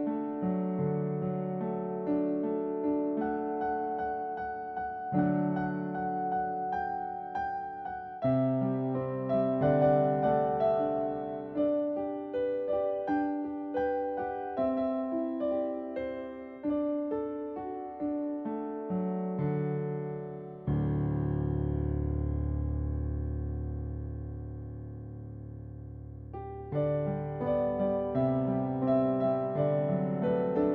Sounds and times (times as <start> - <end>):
Music: 0.0 - 30.7.